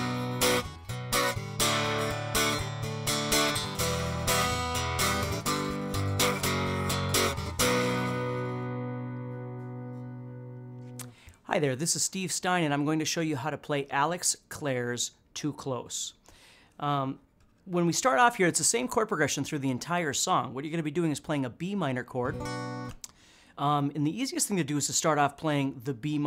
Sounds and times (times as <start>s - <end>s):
Strum: 0.0s - 11.2s, 22.2s - 23.0s
Speech: 11.5s - 16.2s, 16.8s - 22.4s, 23.6s - 26.2s.